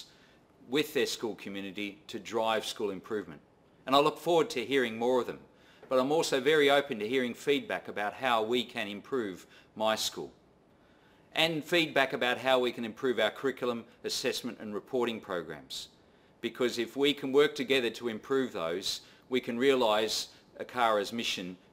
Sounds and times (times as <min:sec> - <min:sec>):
Speech: 0:00.7 - 0:10.4, 0:11.4 - 0:21.6.